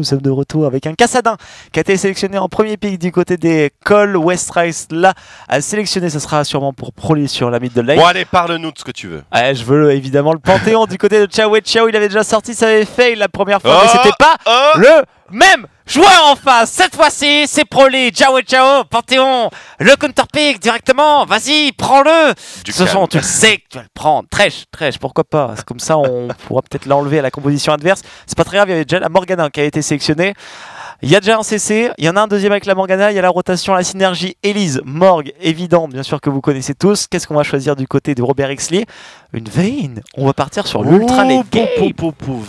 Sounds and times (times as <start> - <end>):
Speech: 0.0 - 30.4, 31.0 - 42.4.